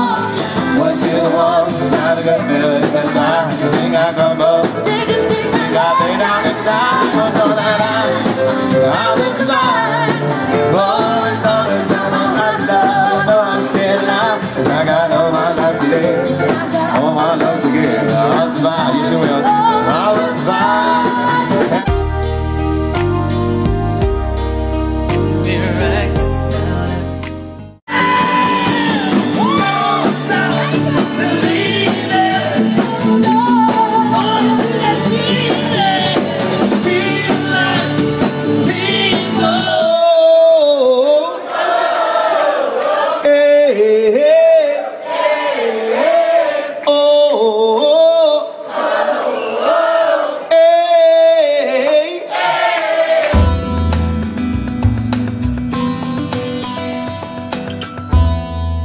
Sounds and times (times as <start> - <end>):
Singing: 0.0 - 22.0, 27.9 - 53.4
Music: 0.0 - 44.6, 49.0 - 58.8
Inside, large room or hall: 0.0 - 58.3.